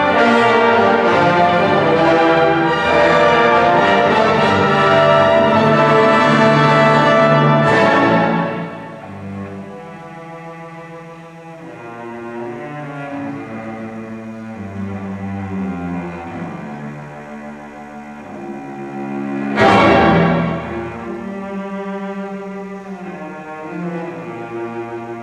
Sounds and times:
Cello: 0.0s - 25.2s.

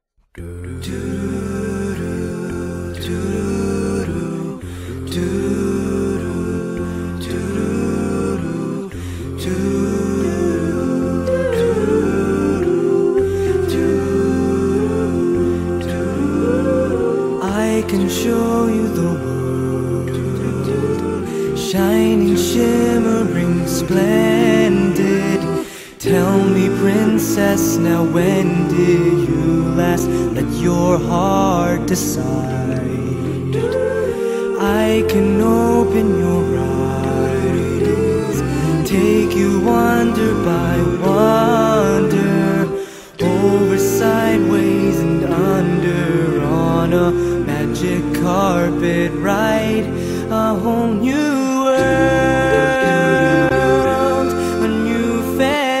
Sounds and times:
Music: 0.2s - 55.8s.

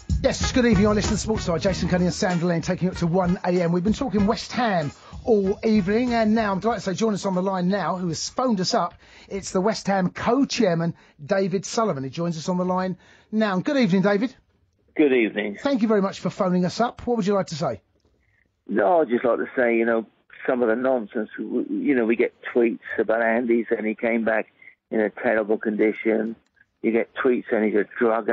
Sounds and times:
Speech: 0.2s - 14.4s, 15.0s - 17.8s, 18.7s - 28.3s
Radio: 18.7s - 28.3s.

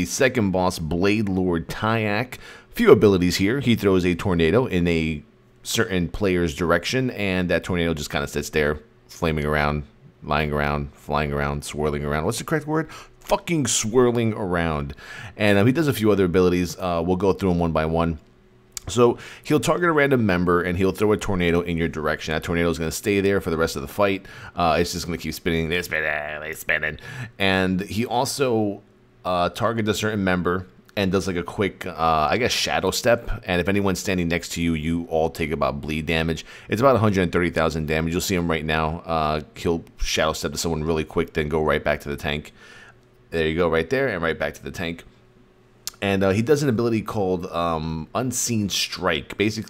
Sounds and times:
Speech: 0.0s - 42.6s, 43.3s - 45.1s, 45.9s - 49.7s.

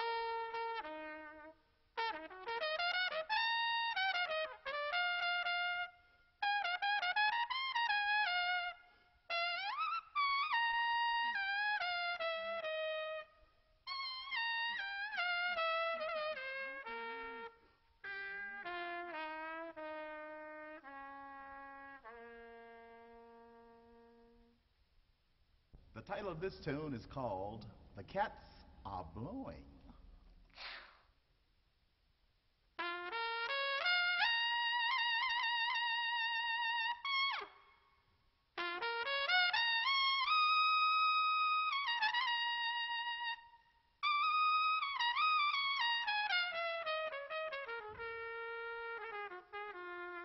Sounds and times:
Music: 0.0s - 24.7s, 32.8s - 50.2s.

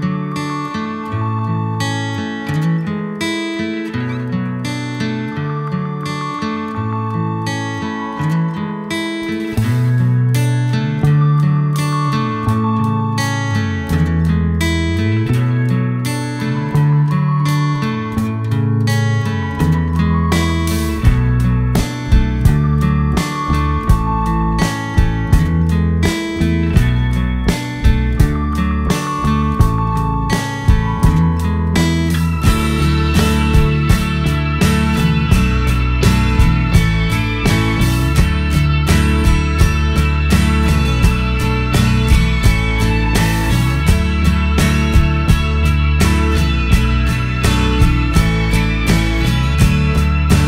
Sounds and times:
Music: 0.0s - 50.4s.

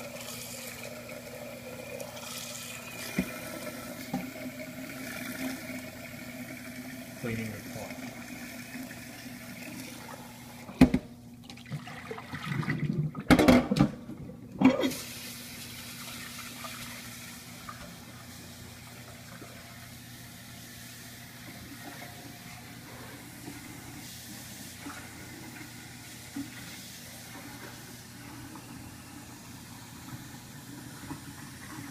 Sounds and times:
Water tap, faucet: 0.0s - 10.8s, 11.4s - 13.1s, 14.7s - 31.9s
Sink (filling or washing): 0.0s - 13.4s, 14.6s - 31.9s
Water: 0.0s - 31.9s.

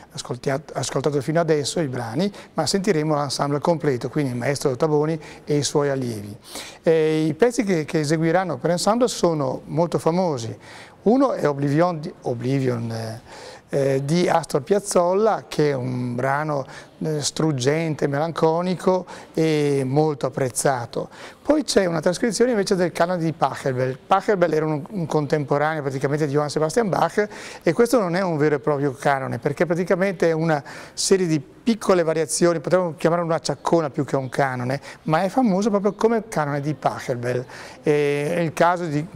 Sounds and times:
Speech: 0.1s - 39.1s.

